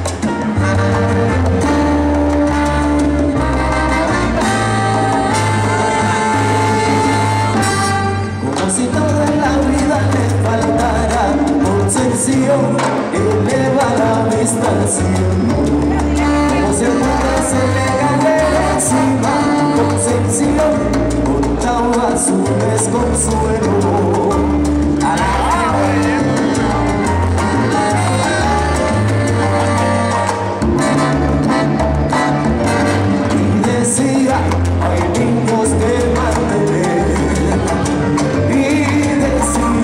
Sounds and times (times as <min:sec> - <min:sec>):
Music: 0:00.0 - 0:39.8.